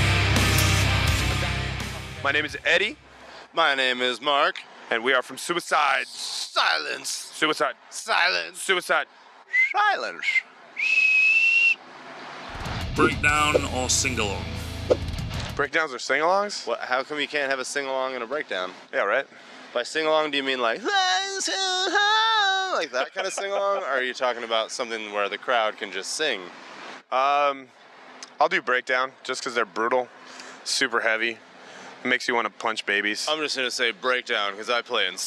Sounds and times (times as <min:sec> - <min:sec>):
Speech: 0:02.2 - 0:10.4, 0:12.9 - 0:14.5, 0:15.6 - 0:26.5, 0:27.1 - 0:27.7, 0:28.3 - 0:31.4, 0:32.0 - 0:35.2.